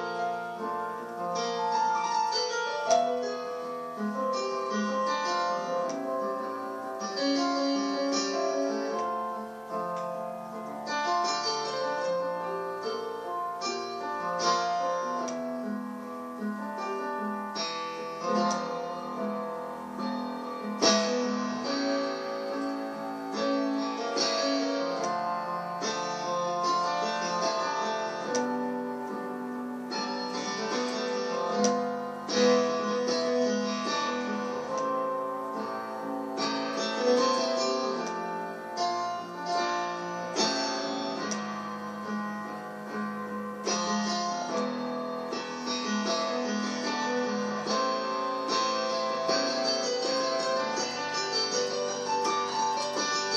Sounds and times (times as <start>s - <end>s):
Inside, small room: 0.0s - 53.3s
Piano: 0.0s - 53.3s.